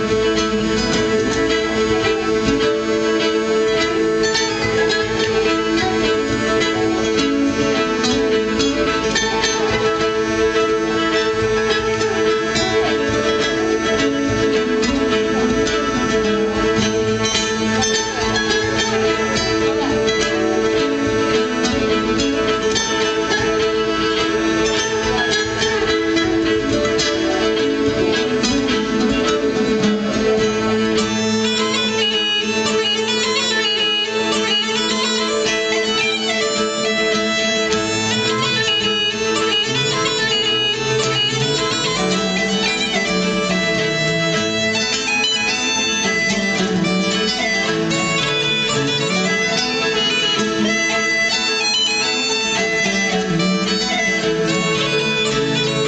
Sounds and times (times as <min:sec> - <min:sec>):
Bluegrass: 0:00.0 - 0:55.8
Harmonic: 0:00.0 - 0:55.8.